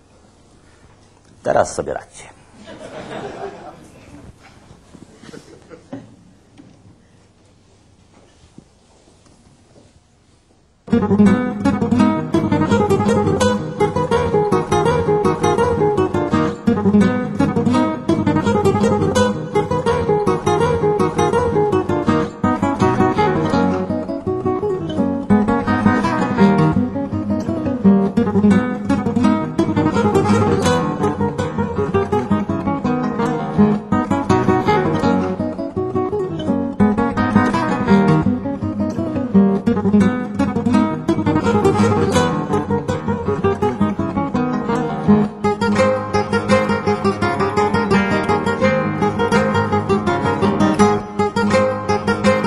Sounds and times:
Strum: 0:10.9 - 0:52.4.

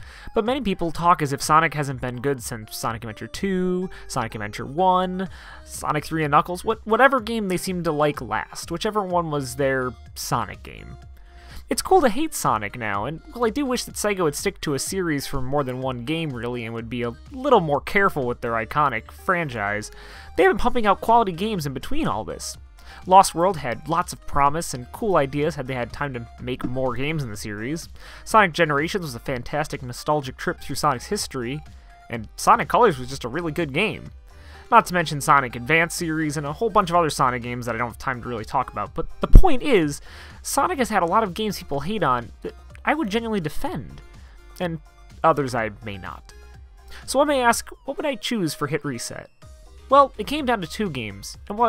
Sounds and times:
Speech: 0:00.3 - 0:11.0, 0:11.7 - 0:34.1, 0:34.7 - 0:44.0, 0:44.6 - 0:46.3, 0:47.0 - 0:49.3, 0:49.9 - 0:51.6.

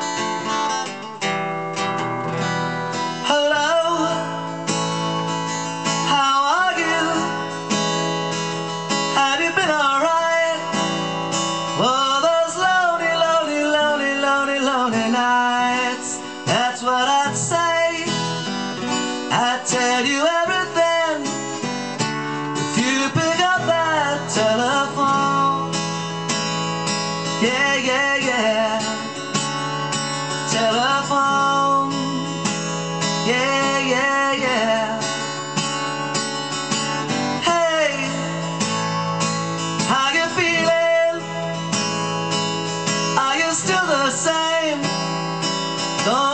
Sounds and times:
Music: 0:00.0 - 0:46.3.

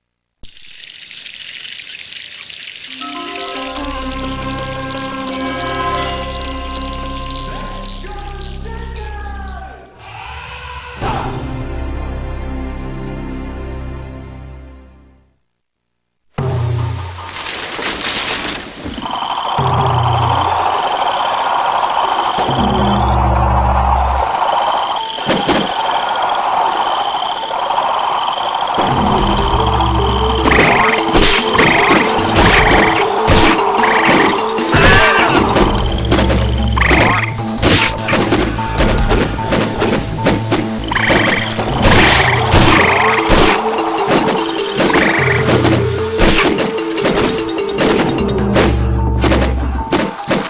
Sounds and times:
Music: 0:02.9 - 0:15.4, 0:16.4 - 0:17.8, 0:19.6 - 0:25.3, 0:28.2 - 0:50.5
Frog: 0:24.5 - 0:33.0, 0:36.7 - 0:37.4, 0:40.9 - 0:43.3.

